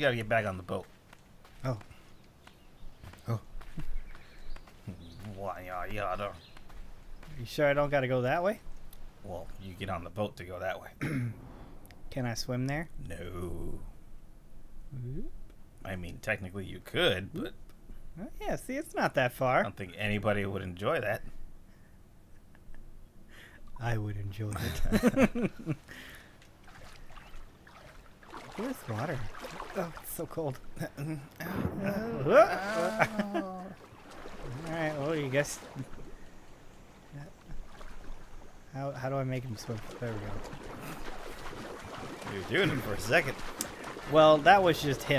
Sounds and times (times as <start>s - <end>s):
Speech: 0.0s - 0.9s, 1.6s - 1.9s, 4.9s - 6.4s, 7.3s - 8.6s, 9.2s - 11.0s, 12.1s - 13.9s, 14.9s - 17.6s, 18.2s - 21.3s, 23.8s - 25.0s, 28.6s - 33.8s, 34.5s - 35.8s, 38.7s - 40.4s, 42.3s - 43.4s, 44.1s - 45.1s.